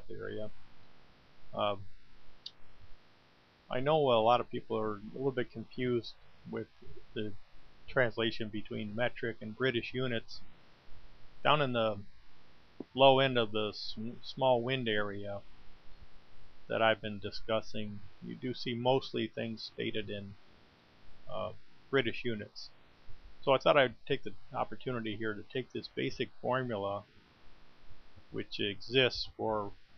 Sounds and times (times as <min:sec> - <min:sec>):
Speech: 0:00.0 - 0:00.5, 0:01.6 - 0:01.8, 0:03.7 - 0:10.4, 0:11.4 - 0:12.0, 0:12.8 - 0:15.4, 0:16.7 - 0:20.4, 0:21.3 - 0:22.7, 0:23.4 - 0:27.0, 0:28.4 - 0:29.8.